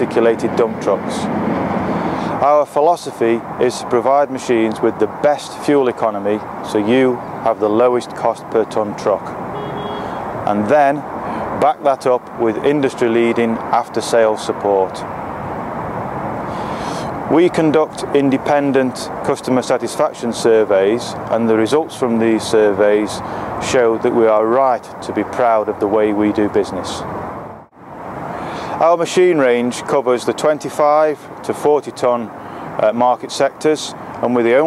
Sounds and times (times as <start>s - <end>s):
Speech: 0.0s - 1.3s, 2.4s - 9.4s, 10.5s - 11.0s, 11.6s - 15.0s, 17.3s - 27.0s, 28.8s - 34.6s.